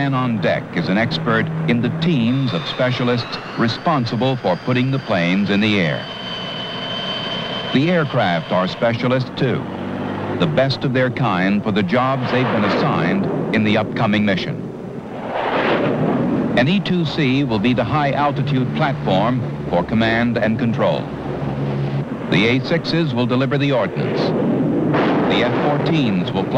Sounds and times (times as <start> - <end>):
Speech: 0.0 - 6.1, 7.8 - 9.7, 10.4 - 14.7, 16.6 - 21.1, 22.3 - 24.3, 25.3 - 26.5
Aircraft engine: 0.6 - 10.5, 17.5 - 22.4.